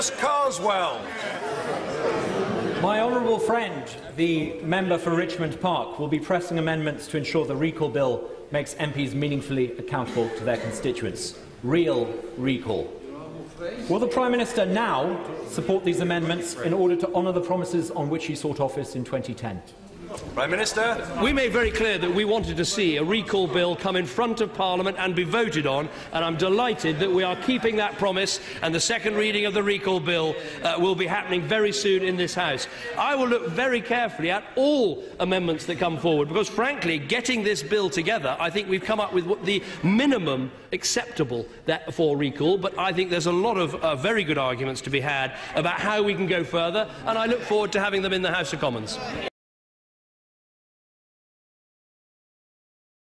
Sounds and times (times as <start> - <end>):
Male speech, man speaking: 0.0 - 1.5, 2.7 - 49.3
Narration, monologue: 2.5 - 49.3.